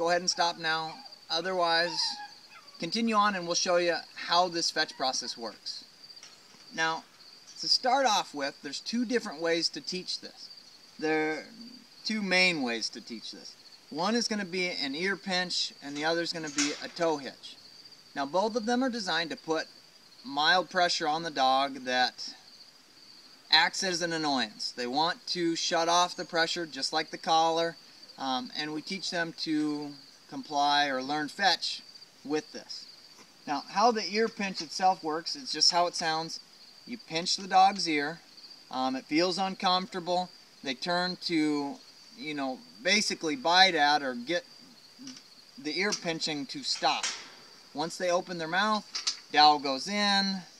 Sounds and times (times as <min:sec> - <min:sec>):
Speech: 0:00.0 - 0:02.2, 0:02.8 - 0:05.8, 0:06.8 - 0:07.0, 0:07.6 - 0:17.6, 0:18.2 - 0:19.7, 0:20.3 - 0:22.4, 0:23.5 - 0:32.9, 0:33.5 - 0:47.2, 0:47.8 - 0:50.5.